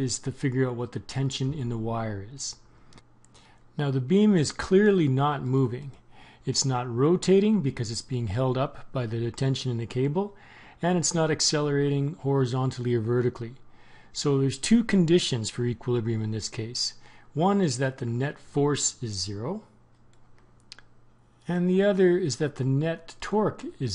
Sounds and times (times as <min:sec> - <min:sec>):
Speech: 0:00.0 - 0:02.6, 0:03.8 - 0:13.6, 0:14.2 - 0:19.7, 0:21.4 - 0:23.9.